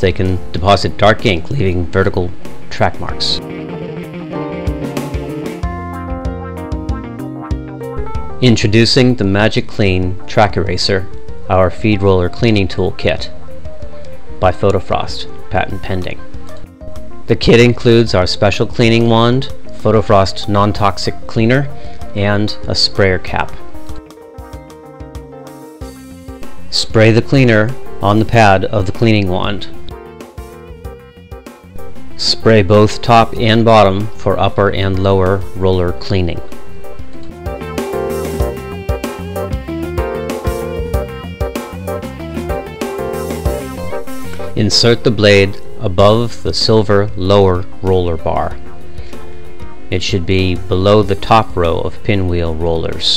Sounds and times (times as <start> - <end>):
Speech: 0.0 - 3.4, 8.4 - 13.3, 14.4 - 16.2, 17.3 - 23.6, 26.7 - 29.8, 32.2 - 36.5, 44.6 - 48.6, 49.9 - 53.1
Music: 0.0 - 53.1.